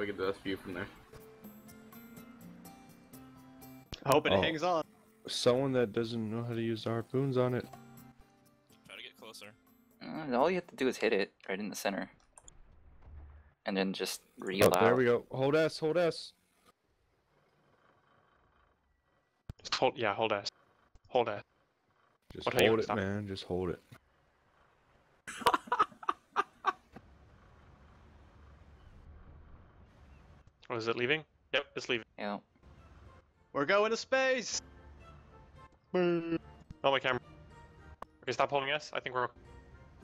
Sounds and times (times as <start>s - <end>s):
Speech: 0.0s - 0.9s, 4.0s - 7.7s, 13.7s - 16.3s, 19.7s - 20.5s, 21.1s - 21.4s, 22.3s - 23.8s, 30.7s - 32.4s, 33.6s - 34.6s, 38.3s - 39.3s.